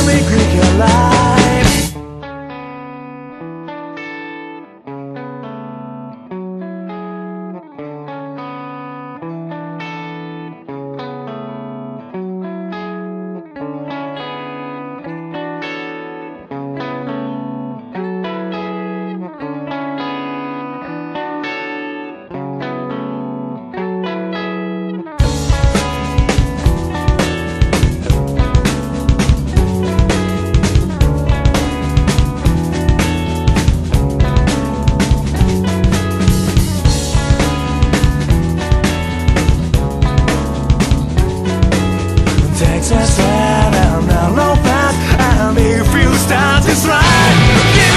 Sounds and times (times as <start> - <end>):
Music: 0.0 - 47.9.